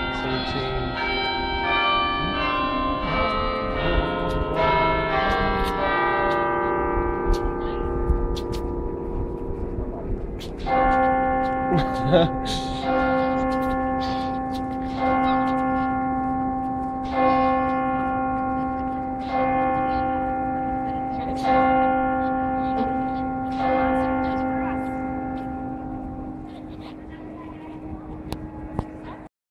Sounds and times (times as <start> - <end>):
Speech: 0.2 - 1.0, 18.5 - 25.1, 26.4 - 29.3.